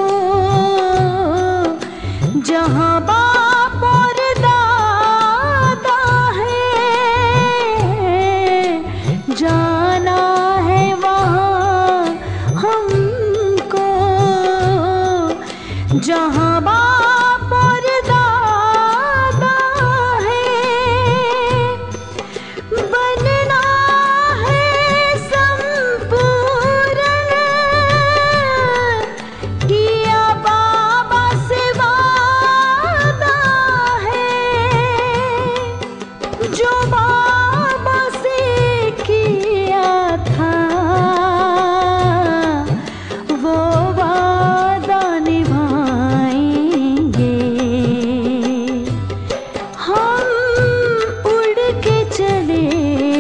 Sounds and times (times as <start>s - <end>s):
Music of Bollywood: 0.0s - 53.2s.